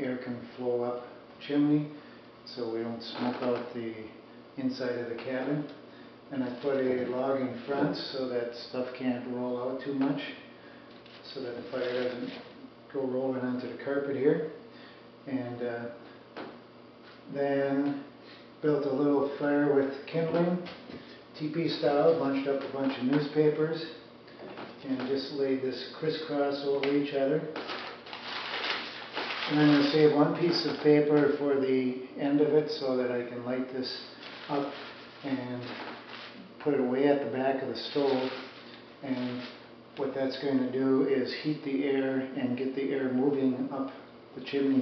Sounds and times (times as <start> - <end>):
Speech: 0.0 - 10.5, 11.2 - 14.6, 15.2 - 16.0, 17.3 - 20.8, 21.4 - 24.1, 24.8 - 27.6, 29.4 - 44.8.